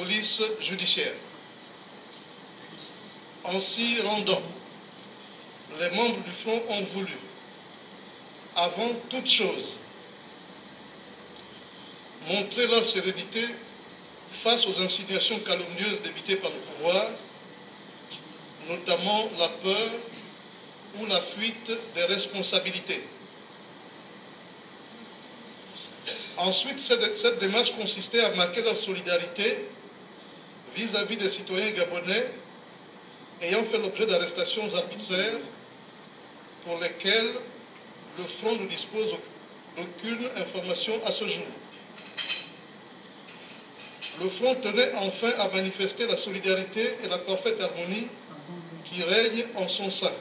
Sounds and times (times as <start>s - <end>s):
Speech: 0.0s - 1.3s, 2.8s - 4.6s, 5.7s - 7.4s, 8.6s - 9.8s, 12.2s - 13.7s, 14.3s - 17.3s, 18.1s - 20.2s, 20.9s - 23.1s, 25.7s - 29.8s, 30.7s - 32.4s, 33.4s - 35.6s, 36.6s - 37.5s, 38.2s - 41.6s, 44.1s - 50.2s.